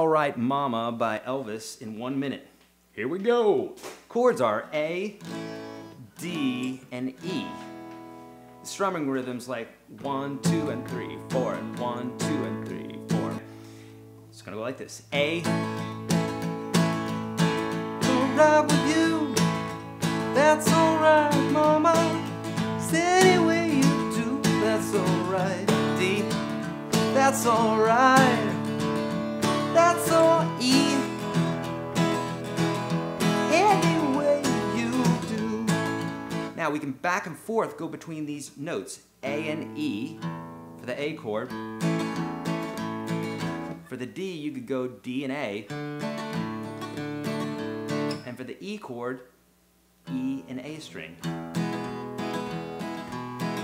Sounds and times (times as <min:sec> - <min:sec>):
Acoustic guitar: 0:03.8 - 0:48.8, 0:50.0 - 0:53.6
Strum: 0:15.2 - 0:36.6.